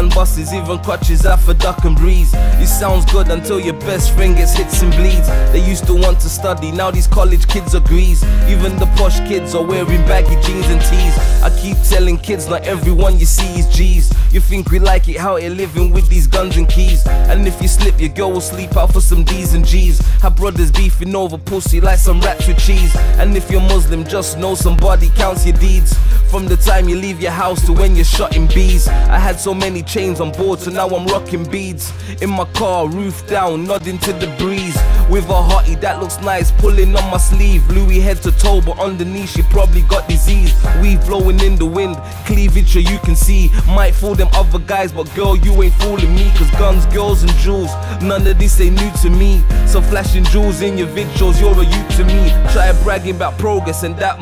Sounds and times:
Music: 0.0 - 54.2.

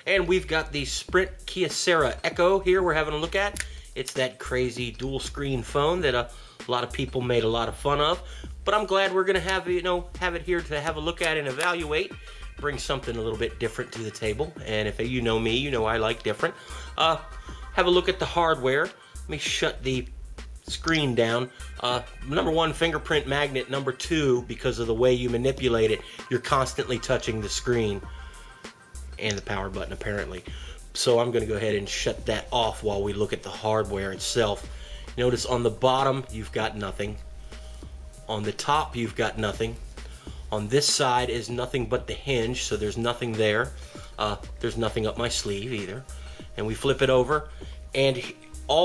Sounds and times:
Speech: 0.0 - 20.1, 20.7 - 28.1, 29.2 - 37.2, 38.3 - 39.8, 40.5 - 48.8
Music: 0.0 - 48.8.

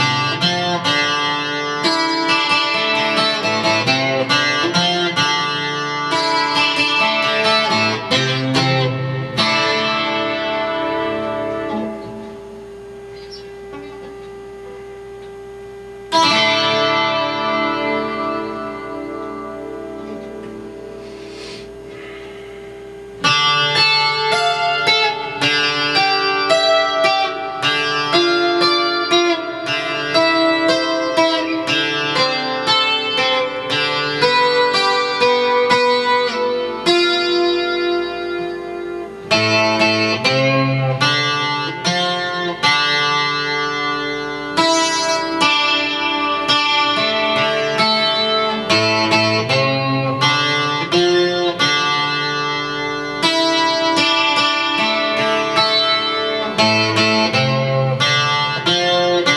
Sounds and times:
Acoustic guitar: 0.0 - 12.4.

